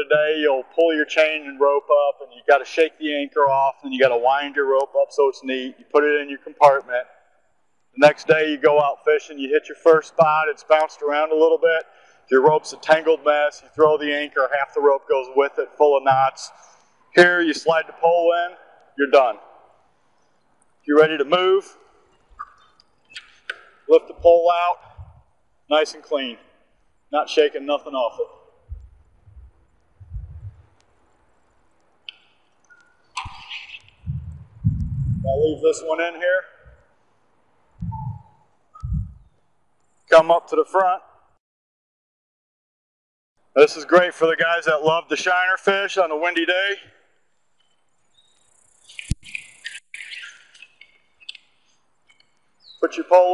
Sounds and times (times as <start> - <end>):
Speech: 0.0 - 7.1, 8.0 - 16.6, 17.2 - 19.4, 20.9 - 21.8, 23.9 - 24.9, 25.7 - 26.4, 27.2 - 28.4, 35.2 - 36.6, 40.1 - 41.0, 43.6 - 46.9, 52.8 - 53.3
Chirp, tweet: 47.6 - 52.9.